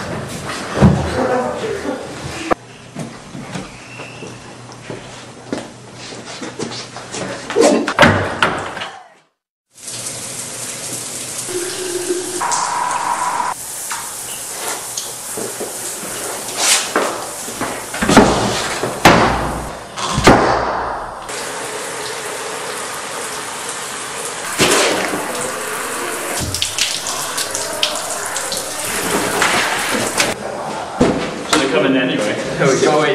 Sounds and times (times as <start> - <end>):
Water: 9.7 - 19.0, 21.3 - 30.4
Water tap, faucet: 9.7 - 19.0, 21.3 - 30.4.